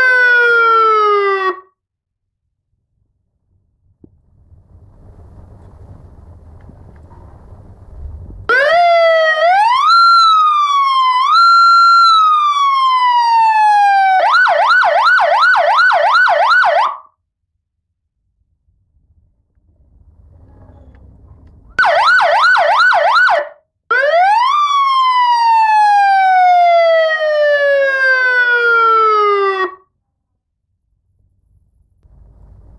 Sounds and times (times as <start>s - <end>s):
Ambulance (siren): 0.0s - 1.8s, 8.5s - 17.1s, 21.8s - 29.9s
Police car (siren): 0.0s - 1.8s, 8.5s - 17.1s, 21.8s - 29.9s.